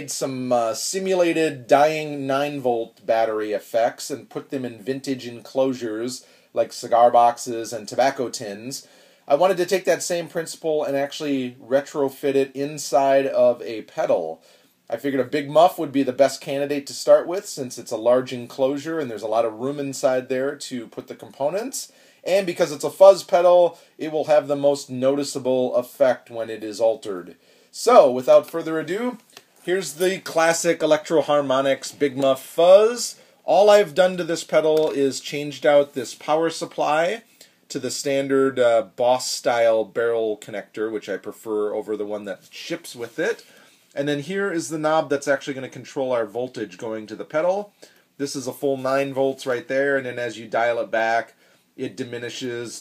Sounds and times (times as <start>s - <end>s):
Speech: 0.0s - 52.8s.